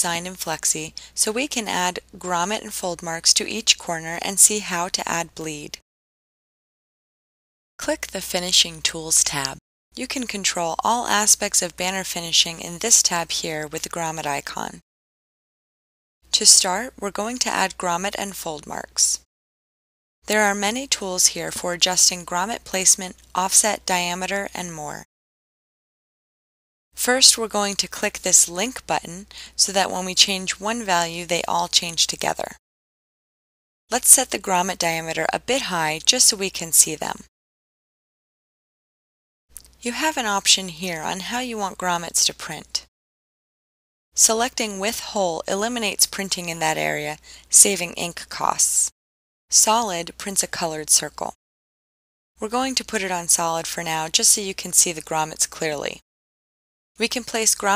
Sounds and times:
Speech: 0:00.0 - 0:05.8, 0:07.8 - 0:14.8, 0:16.3 - 0:19.3, 0:20.3 - 0:25.1, 0:27.0 - 0:32.6, 0:33.9 - 0:37.3, 0:39.8 - 0:42.9, 0:44.2 - 0:48.9, 0:49.5 - 0:51.4, 0:52.4 - 0:56.0, 0:57.0 - 0:57.7.

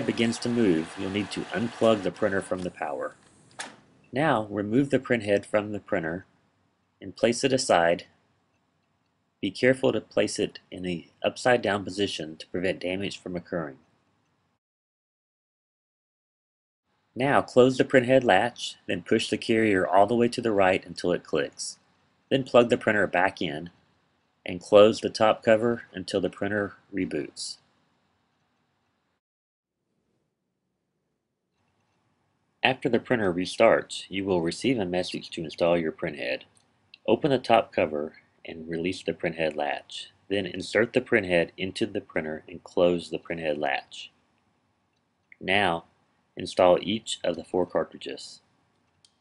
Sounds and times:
Speech: 0:00.0 - 0:03.2, 0:04.2 - 0:06.3, 0:07.0 - 0:08.2, 0:09.4 - 0:13.8, 0:17.2 - 0:23.8, 0:24.5 - 0:27.6, 0:32.6 - 0:36.4, 0:37.0 - 0:44.2, 0:45.4 - 0:48.4.

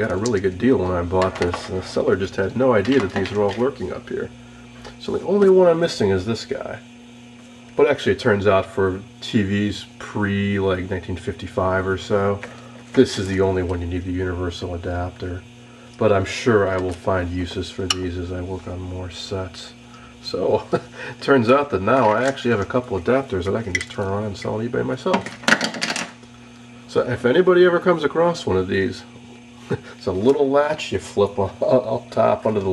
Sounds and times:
Speech: 0:00.0 - 0:06.9, 0:07.8 - 0:25.3, 0:26.9 - 0:32.7.

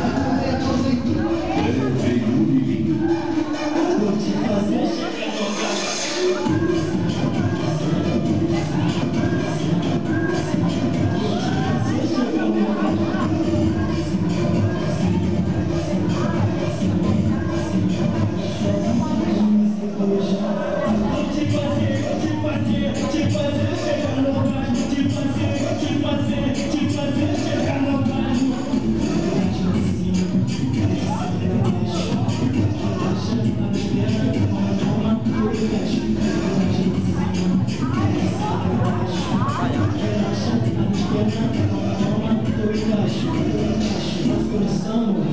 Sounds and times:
Music: 0:00.0 - 0:45.3
Speech: 0:00.0 - 0:45.3.

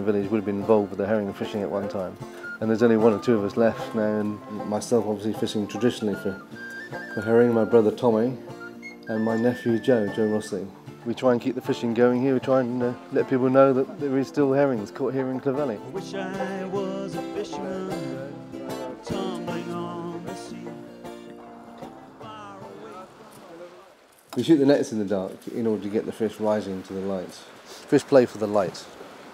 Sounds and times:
Speech: 0:00.0 - 0:06.4, 0:07.2 - 0:08.4, 0:09.1 - 0:16.3, 0:22.7 - 0:28.9
Music: 0:00.0 - 0:23.4.

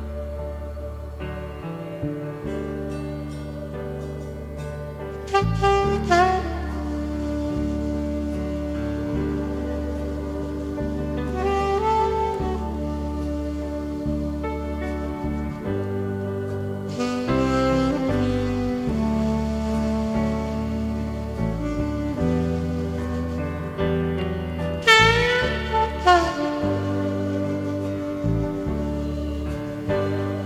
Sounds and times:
Brass instrument: 0:00.0 - 0:30.4
Saxophone: 0:00.0 - 0:30.4.

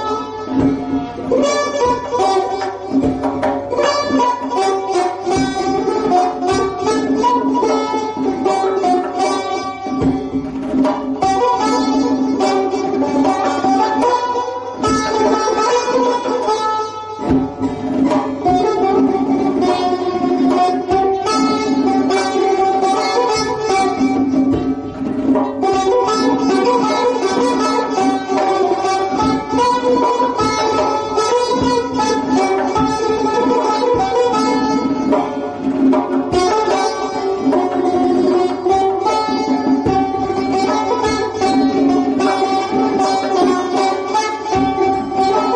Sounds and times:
Music: 0:00.0 - 0:45.5.

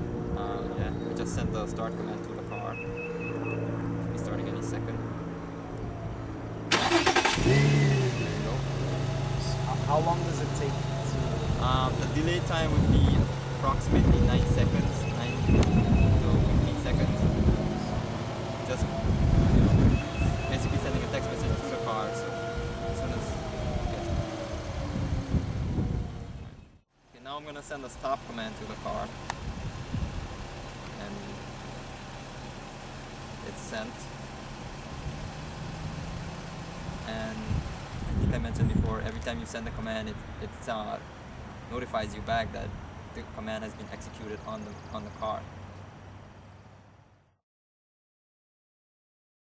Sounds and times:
Car: 0:00.0 - 0:47.4
Speech: 0:00.4 - 0:02.8, 0:04.1 - 0:05.0, 0:08.2 - 0:17.9, 0:18.7 - 0:18.9, 0:20.5 - 0:22.2, 0:23.0 - 0:24.2, 0:27.2 - 0:29.2, 0:30.9 - 0:31.4, 0:33.4 - 0:34.1, 0:37.1 - 0:37.6, 0:38.2 - 0:41.0, 0:41.7 - 0:45.5
Accelerating, revving, vroom: 0:07.4 - 0:26.4.

